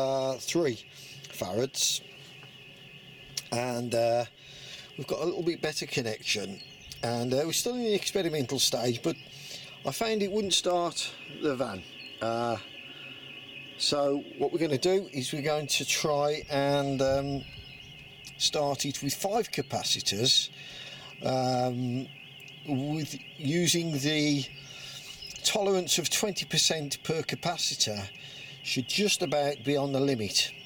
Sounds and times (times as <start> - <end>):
Speech: 0.0 - 2.0, 3.4 - 4.3, 4.9 - 9.2, 9.8 - 12.7, 13.8 - 17.5, 18.3 - 20.5, 21.1 - 24.5, 25.3 - 30.6.